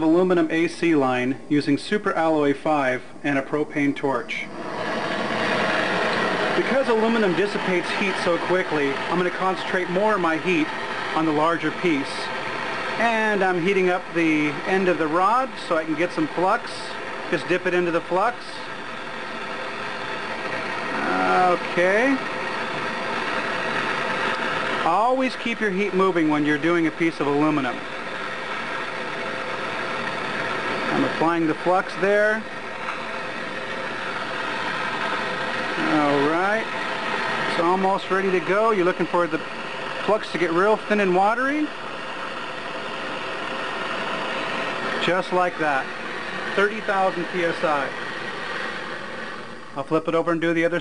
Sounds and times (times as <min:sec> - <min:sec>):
Speech: 0:00.0 - 0:04.5, 0:06.6 - 0:12.3, 0:13.0 - 0:18.7, 0:21.0 - 0:22.3, 0:24.8 - 0:27.8, 0:30.9 - 0:32.5, 0:35.8 - 0:36.7, 0:37.5 - 0:39.4, 0:40.0 - 0:41.8, 0:45.0 - 0:45.9, 0:46.6 - 0:48.0, 0:49.8 - 0:50.8.